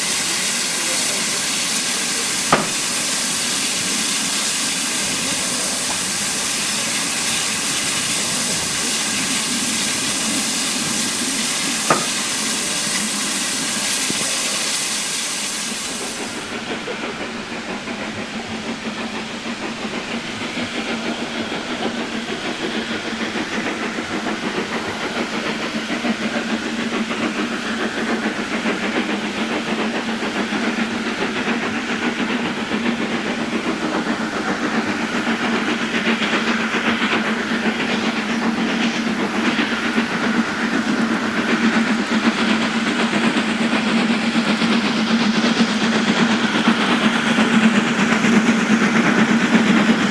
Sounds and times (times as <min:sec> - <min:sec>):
Hiss: 0:00.0 - 0:50.1.